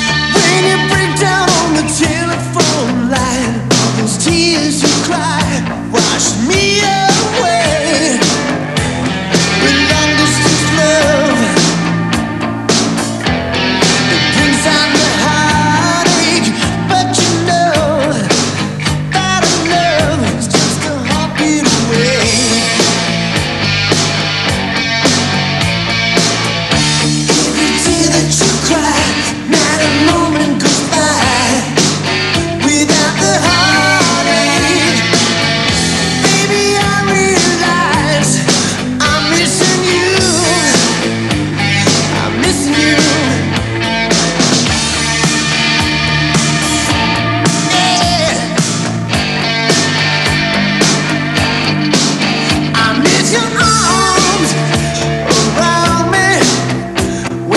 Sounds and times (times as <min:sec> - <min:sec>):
Music: 0:00.0 - 0:57.5.